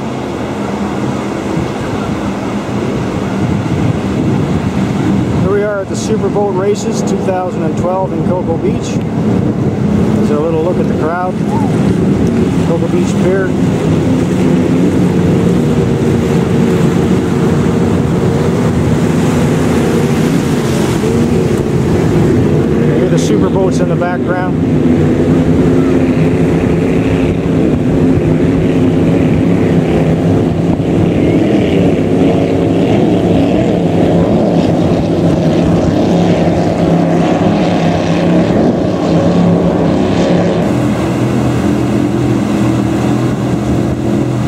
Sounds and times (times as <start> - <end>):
Motorboat, speedboat: 0.0 - 44.4.